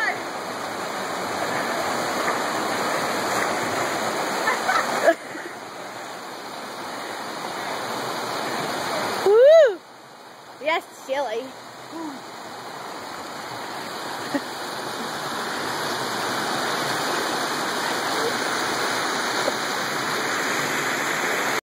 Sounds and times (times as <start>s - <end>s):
Waterfall: 0.0s - 21.6s.